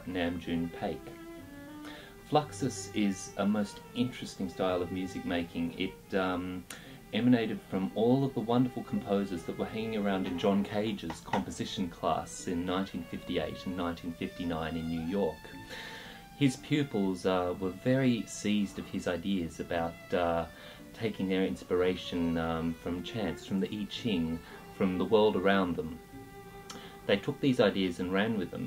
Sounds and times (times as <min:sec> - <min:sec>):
Speech: 0:00.0 - 0:01.1, 0:02.3 - 0:15.5, 0:16.4 - 0:26.0, 0:27.1 - 0:28.6
Music: 0:00.0 - 0:28.6.